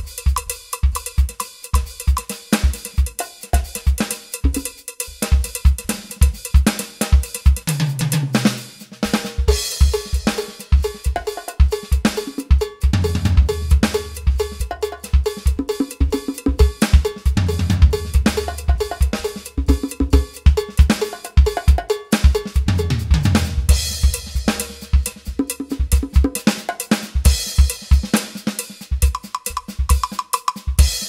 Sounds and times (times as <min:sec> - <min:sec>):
Drum kit: 0:00.0 - 0:31.0
Drum roll: 0:00.0 - 0:31.0
Bass drum: 0:09.0 - 0:26.5.